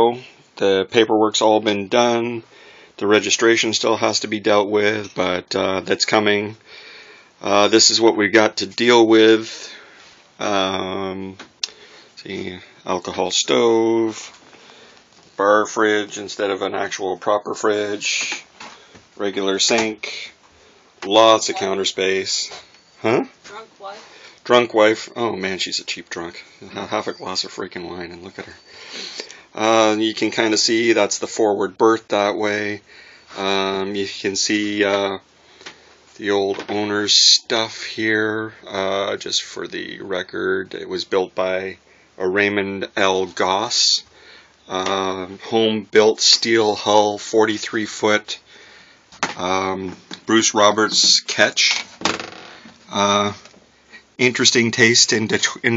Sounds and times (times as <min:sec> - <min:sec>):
Speech: 0:00.0 - 0:02.4, 0:03.0 - 0:06.6, 0:07.4 - 0:09.8, 0:10.4 - 0:11.4, 0:12.2 - 0:14.4, 0:15.4 - 0:18.5, 0:19.2 - 0:20.4, 0:21.0 - 0:28.6, 0:29.6 - 0:32.8, 0:33.4 - 0:35.2, 0:36.2 - 0:44.1, 0:44.7 - 0:48.4, 0:49.4 - 0:51.8, 0:52.9 - 0:53.4, 0:54.2 - 0:55.7.